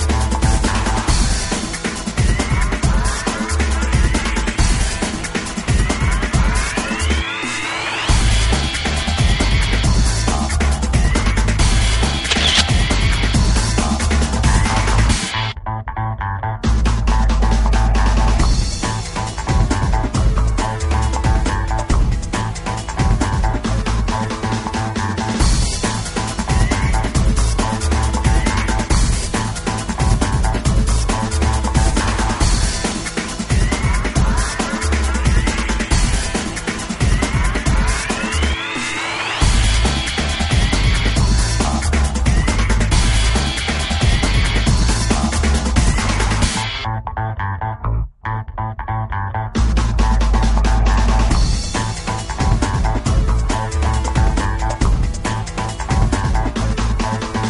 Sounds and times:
Music: 0:00.0 - 0:57.5
Single-lens reflex camera: 0:12.2 - 0:13.0.

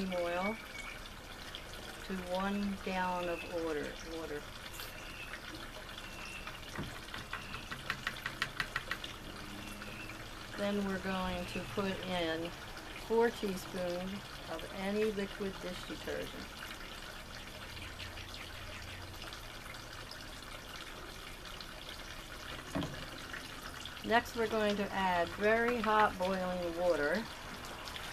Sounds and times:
Speech: 0:00.0 - 0:00.6, 0:02.1 - 0:04.4, 0:10.6 - 0:16.5, 0:24.1 - 0:27.3.

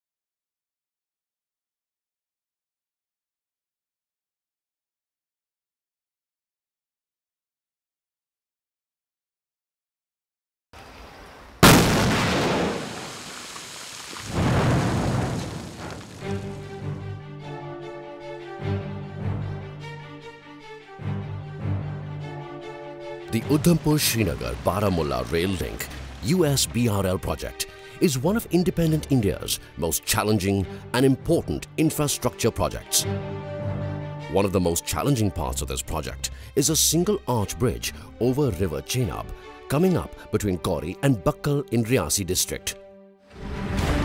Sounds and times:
Music: 0:16.2 - 0:44.0.

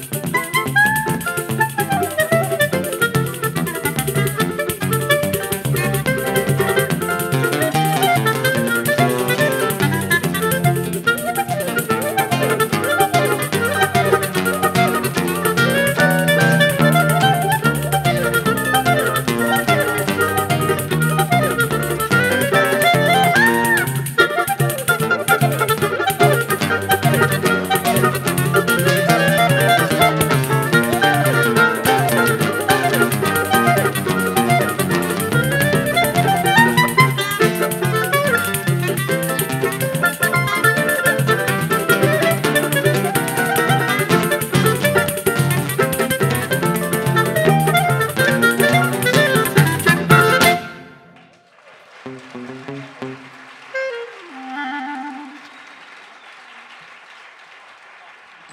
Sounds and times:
Acoustic guitar: 0:00.0 - 0:51.2, 0:52.1 - 0:54.8
Bowed string instrument: 0:00.0 - 0:51.2
Clarinet: 0:00.0 - 0:51.4, 0:52.1 - 0:55.8.

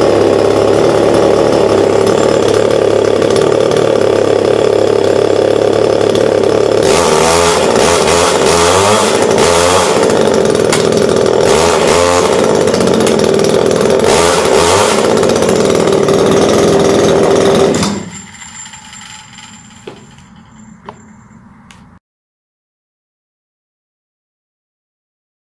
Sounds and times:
Chainsaw: 0:00.0 - 0:21.0
Tools: 0:17.8 - 0:21.9.

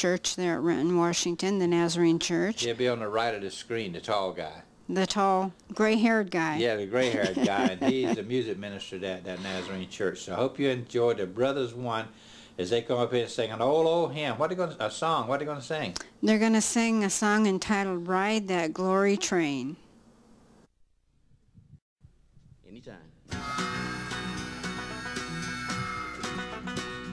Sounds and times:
Speech: 0:00.0 - 0:19.8, 0:22.7 - 0:23.1.

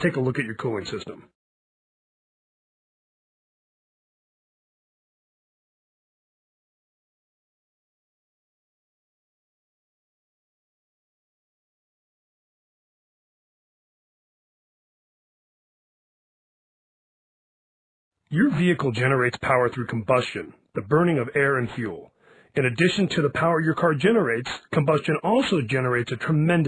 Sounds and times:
Speech: 0:00.0 - 0:01.4, 0:18.3 - 0:26.6.

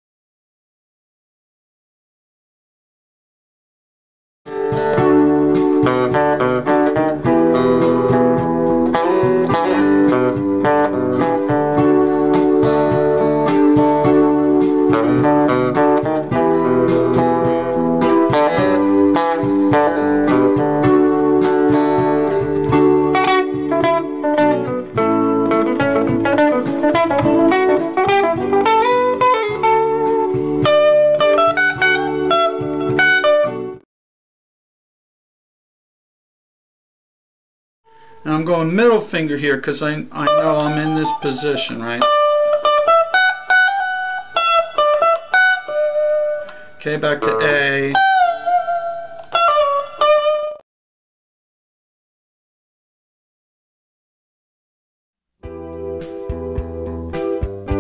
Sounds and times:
Electric guitar: 0:04.5 - 0:33.8, 0:40.1 - 0:50.6, 0:55.5 - 0:57.8
Speech: 0:38.2 - 0:42.1, 0:46.8 - 0:48.0.

